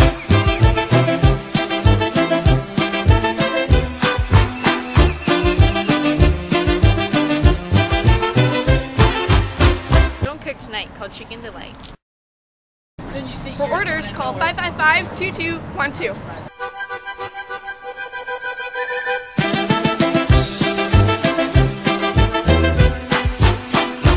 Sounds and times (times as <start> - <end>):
Music: 0.0 - 10.3, 16.5 - 24.1
Speech: 10.3 - 11.8, 13.1 - 16.5.